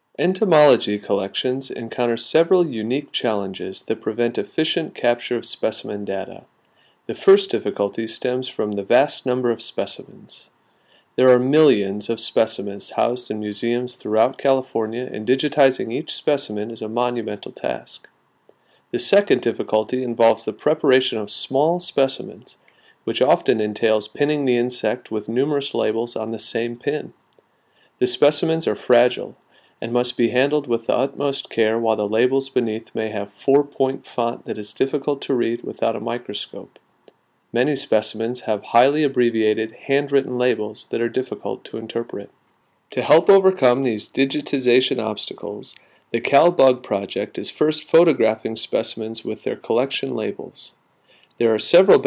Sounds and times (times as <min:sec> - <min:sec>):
Speech: 0:00.2 - 0:06.5, 0:07.1 - 0:10.5, 0:11.2 - 0:18.1, 0:18.9 - 0:27.2, 0:28.0 - 0:36.8, 0:37.6 - 0:50.8, 0:51.4 - 0:52.0.